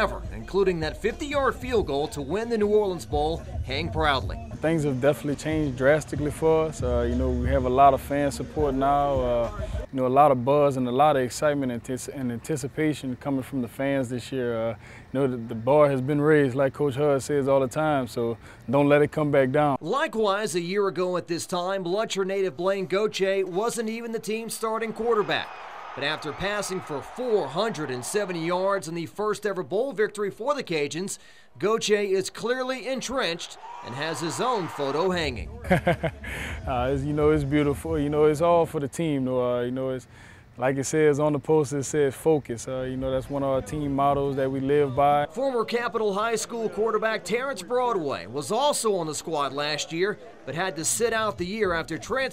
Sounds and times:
Speech: 0.0s - 35.6s, 36.6s - 52.3s.

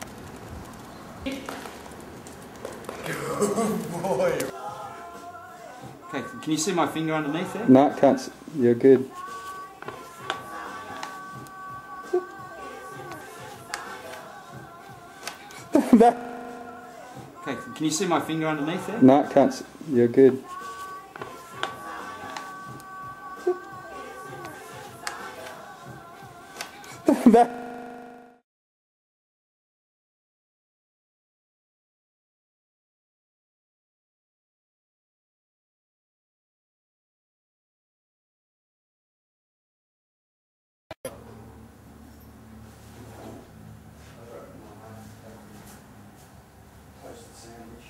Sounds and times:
Music: 3.1s - 27.4s.

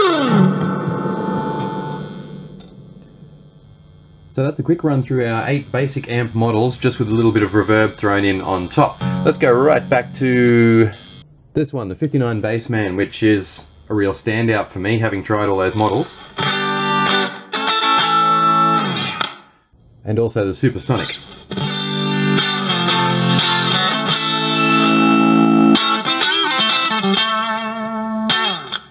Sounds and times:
Music: 0.0s - 2.8s, 8.2s - 11.2s, 16.3s - 19.5s, 21.3s - 28.9s
Speech: 4.3s - 11.0s, 11.6s - 16.2s, 20.0s - 21.2s.

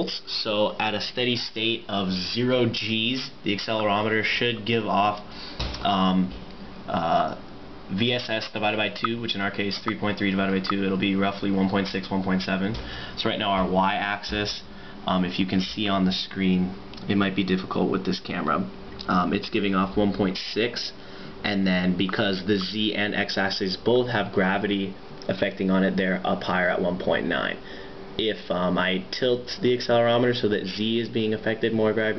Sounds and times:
Speech: 0.0s - 27.6s, 28.2s - 32.1s.

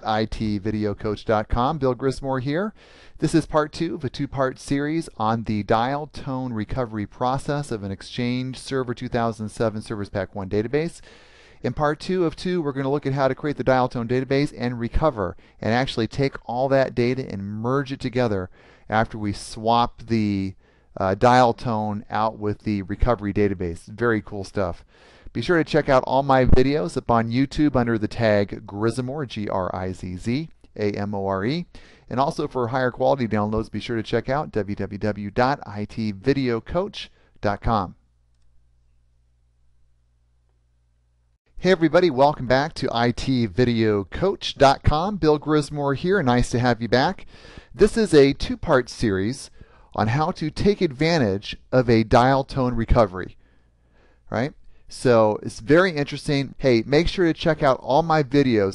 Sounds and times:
Speech: 0.0s - 11.0s, 11.6s - 38.0s, 41.6s - 53.4s, 54.3s - 58.7s.

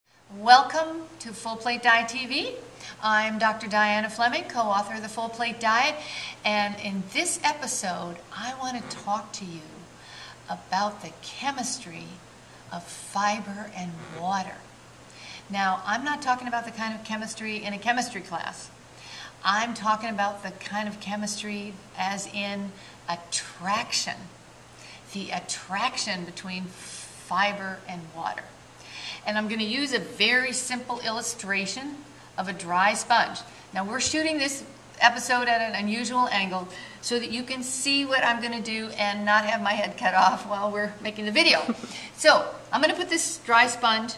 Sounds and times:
Speech: 0.3s - 9.9s, 10.5s - 14.7s, 15.5s - 18.7s, 19.4s - 24.3s, 25.1s - 28.6s, 29.2s - 44.1s.

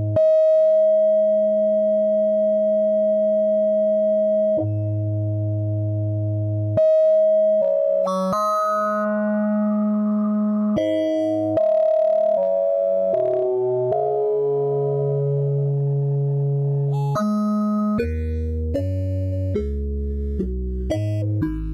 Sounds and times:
Synthesizer: 0.0s - 21.7s.

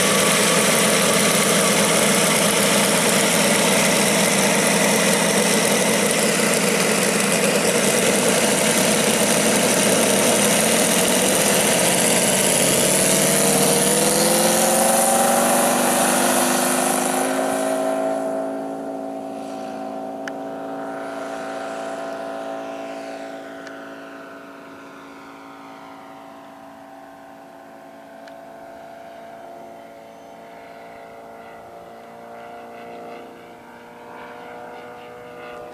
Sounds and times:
Aircraft: 0.0s - 35.7s
Accelerating, revving, vroom: 11.0s - 24.1s, 30.7s - 35.7s.

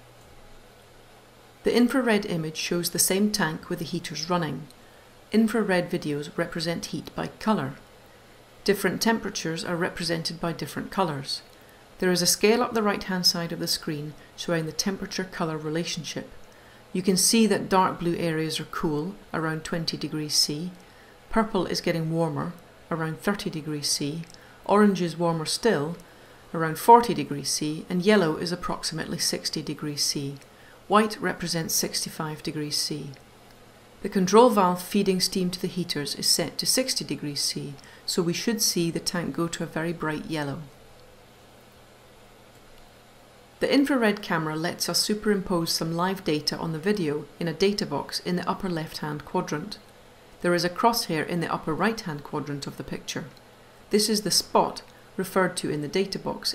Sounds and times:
Speech: 1.6s - 7.9s, 8.6s - 16.4s, 17.0s - 33.2s, 34.0s - 40.7s, 43.6s - 56.5s.

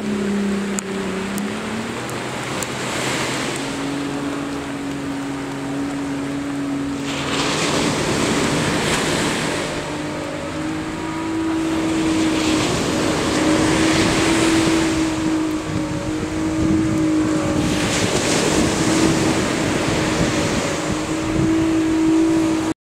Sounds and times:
Motorboat, speedboat: 0.0s - 22.8s.

